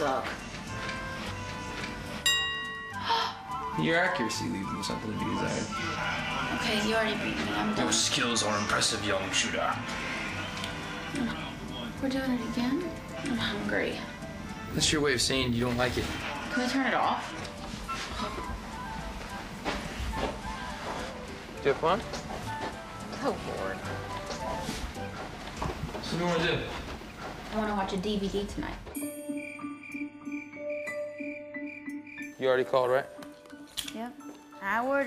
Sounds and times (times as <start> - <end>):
Music: 0.0 - 35.0.